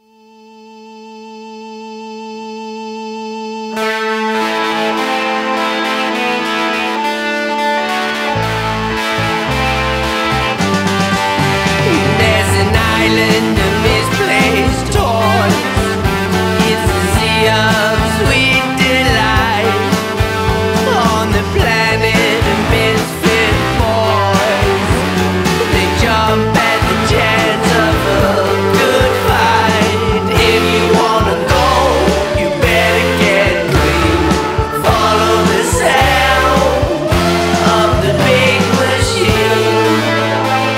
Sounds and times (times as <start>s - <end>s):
Music: 0.0s - 40.7s.